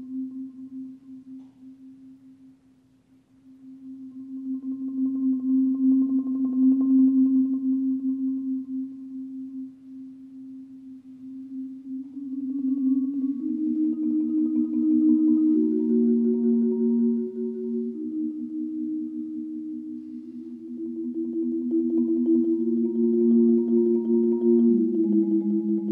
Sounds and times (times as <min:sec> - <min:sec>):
Marimba, xylophone: 0:11.5 - 0:25.9.